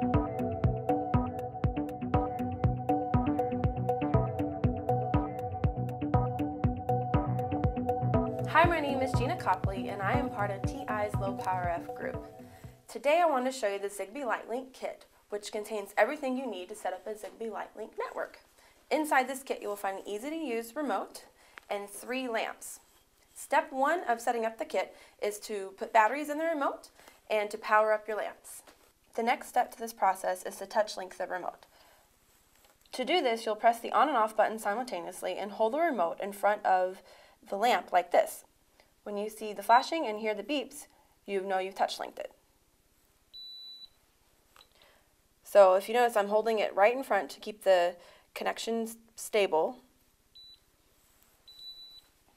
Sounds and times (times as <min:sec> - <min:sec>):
Speech: 0:08.5 - 0:12.2, 0:12.9 - 0:22.8, 0:23.4 - 0:31.6, 0:32.9 - 0:38.5, 0:39.1 - 0:42.4, 0:45.5 - 0:49.9.